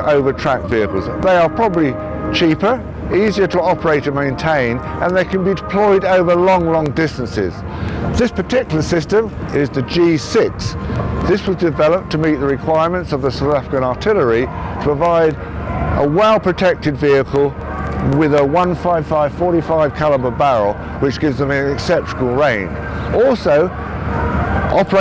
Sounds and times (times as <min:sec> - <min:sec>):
Speech: 0:00.0 - 0:07.6, 0:08.2 - 0:15.4, 0:16.0 - 0:23.7, 0:24.7 - 0:25.0
Music: 0:00.0 - 0:25.0
Outside, urban or manmade: 0:00.0 - 0:25.0.